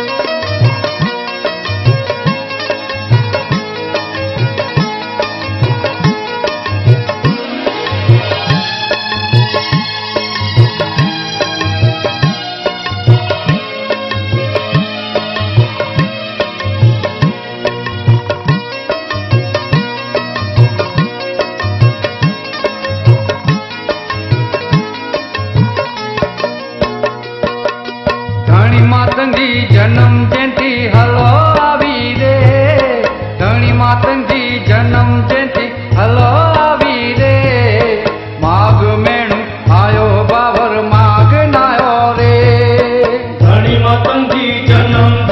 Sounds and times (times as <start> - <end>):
Music: 0.0 - 45.3.